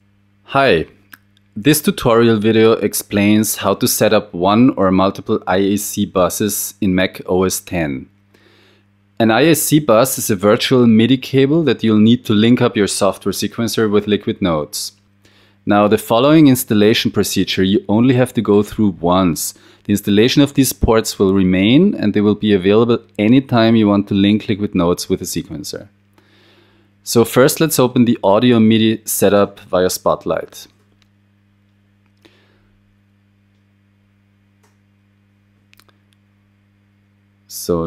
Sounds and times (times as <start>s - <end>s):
Speech: 0.5s - 1.0s, 1.6s - 8.1s, 9.2s - 15.0s, 15.7s - 25.9s, 27.0s - 30.8s, 37.5s - 37.8s.